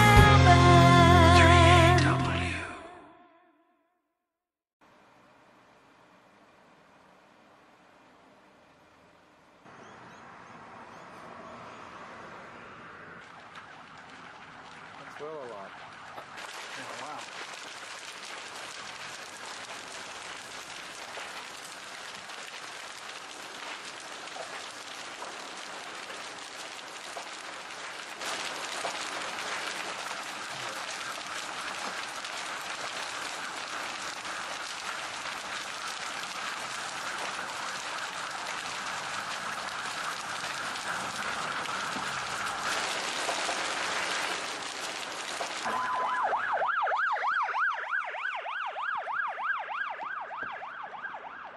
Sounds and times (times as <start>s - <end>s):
Outside, rural or natural: 0.0s - 3.0s, 4.8s - 51.5s
Fire: 4.8s - 51.5s.